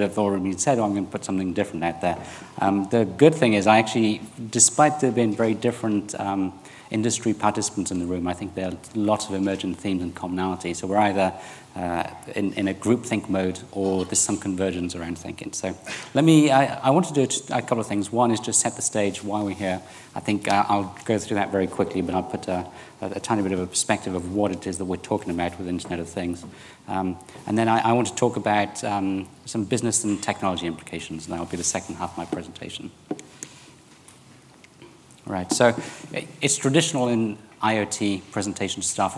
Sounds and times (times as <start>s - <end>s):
Speech: 0.0s - 33.0s, 35.2s - 39.1s.